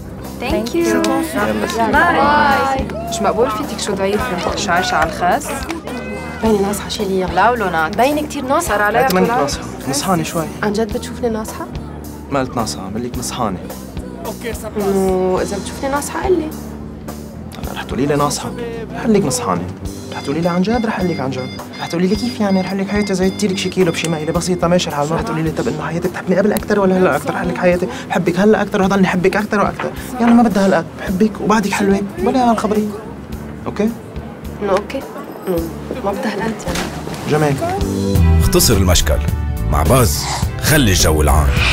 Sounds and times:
Music: 0:00.0 - 0:41.7.

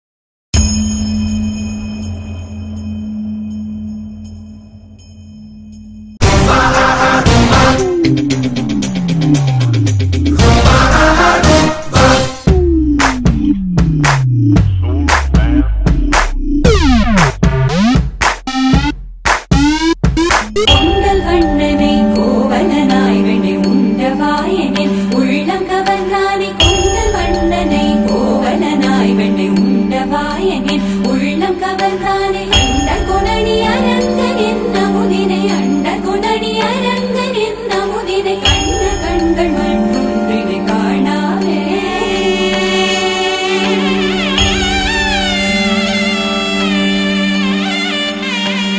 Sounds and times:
Music: 0:00.6 - 0:48.7.

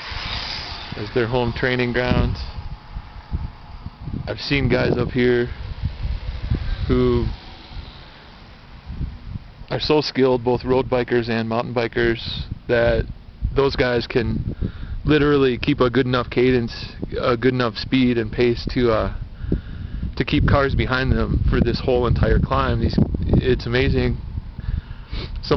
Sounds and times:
Speech: 0:01.0 - 0:02.6, 0:04.3 - 0:05.6, 0:06.9 - 0:07.3, 0:09.7 - 0:14.4, 0:15.1 - 0:19.2, 0:20.2 - 0:24.2.

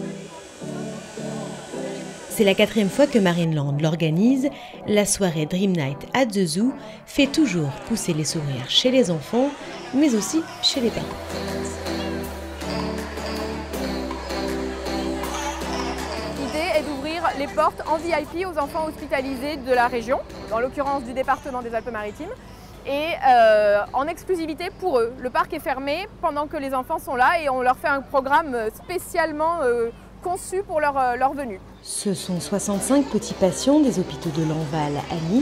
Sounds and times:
Speech: 0:16.4 - 0:35.4.

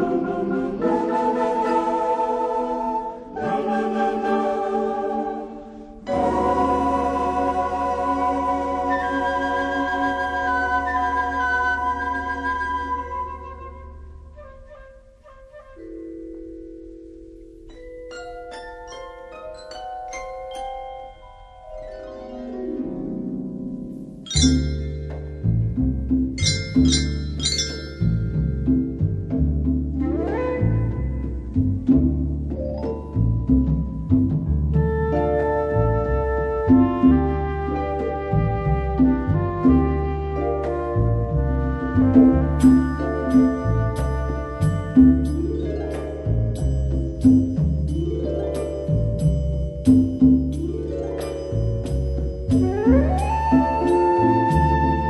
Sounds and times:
Glockenspiel: 0:15.8 - 0:31.8, 0:32.4 - 0:37.2, 0:42.4 - 0:55.1
Marimba, xylophone: 0:15.8 - 0:38.3, 0:41.8 - 0:55.1.

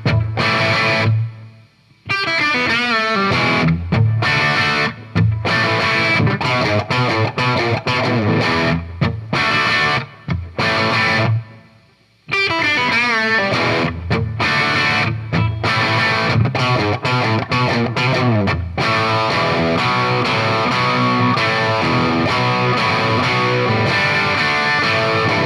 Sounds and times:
Guitar: 0:00.0 - 0:25.4.

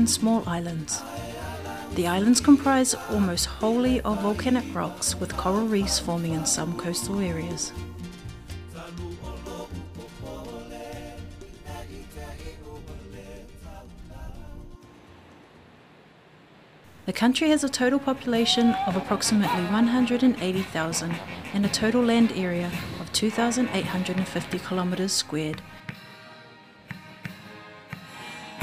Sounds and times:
Speech: 0:00.0 - 0:01.1, 0:02.0 - 0:07.8, 0:17.1 - 0:25.7
Music: 0:00.0 - 0:15.8, 0:17.3 - 0:28.6.

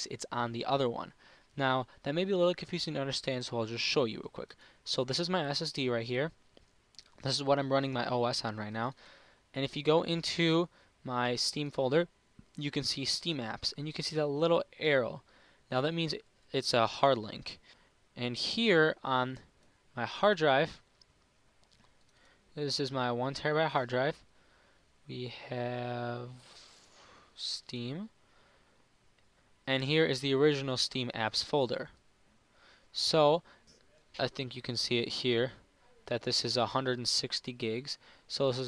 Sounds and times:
Speech: 0:00.0 - 0:06.4, 0:07.1 - 0:09.0, 0:09.6 - 0:17.6, 0:18.2 - 0:20.8, 0:22.6 - 0:24.2, 0:25.1 - 0:26.5, 0:27.4 - 0:28.1, 0:29.7 - 0:32.0, 0:32.9 - 0:33.5, 0:34.1 - 0:38.6.

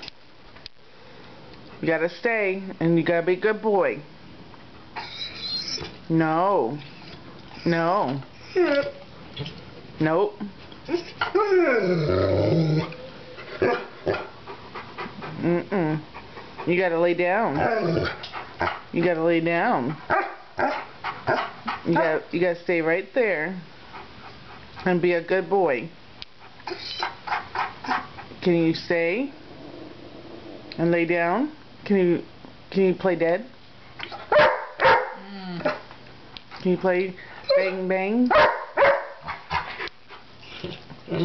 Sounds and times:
Speech: 0:10.0 - 0:10.6, 0:21.9 - 0:23.7, 0:28.4 - 0:29.4, 0:36.6 - 0:38.3
Dog: 0:12.8 - 0:15.4, 0:20.0 - 0:22.2, 0:26.4 - 0:28.3, 0:34.0 - 0:35.9, 0:37.4 - 0:40.8.

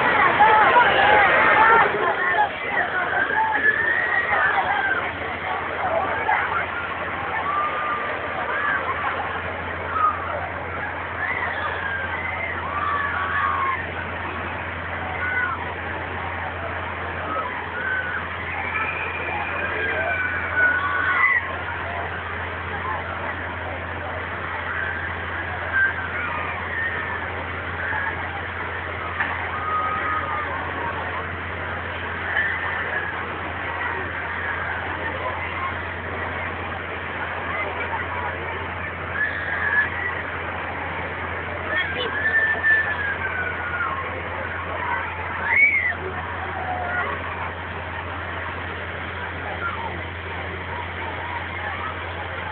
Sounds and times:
Speech: 0:00.0 - 0:52.5.

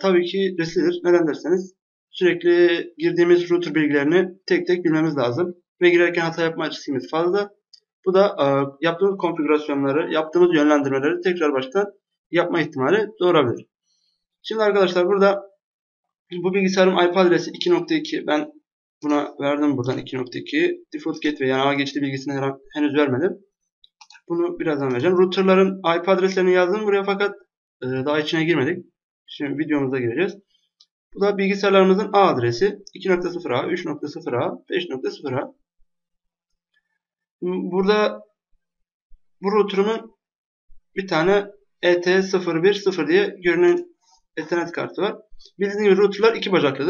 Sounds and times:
Speech: 0:00.0 - 0:07.5, 0:08.1 - 0:13.6, 0:14.5 - 0:15.4, 0:16.3 - 0:23.4, 0:24.1 - 0:30.4, 0:31.2 - 0:35.5, 0:37.4 - 0:38.2, 0:39.4 - 0:40.1, 0:41.0 - 0:43.8, 0:44.4 - 0:46.8.

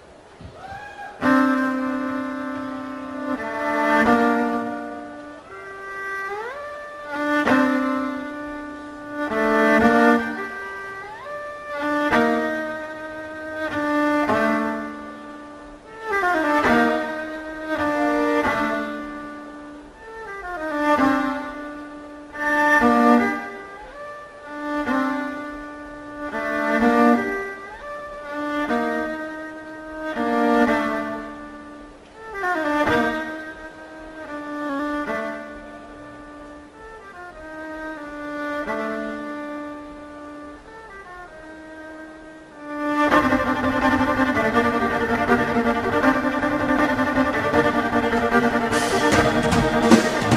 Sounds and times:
Violin, fiddle: 0:00.0 - 0:50.3.

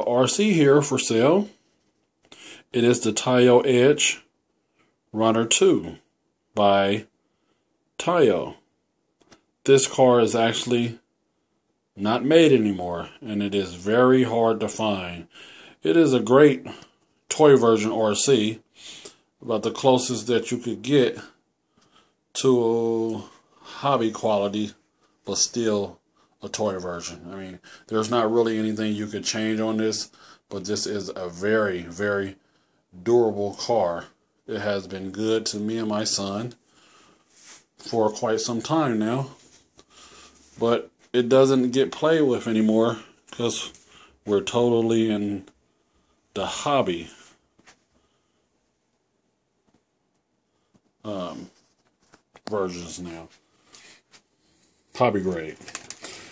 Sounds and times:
Speech: 0:00.0 - 0:01.6, 0:02.6 - 0:04.3, 0:05.1 - 0:07.1, 0:08.0 - 0:08.7, 0:09.6 - 0:11.1, 0:12.0 - 0:21.4, 0:22.3 - 0:36.6, 0:37.8 - 0:39.5, 0:40.6 - 0:45.6, 0:46.3 - 0:47.4, 0:51.0 - 0:51.6, 0:52.4 - 0:53.4, 0:54.9 - 0:55.8.

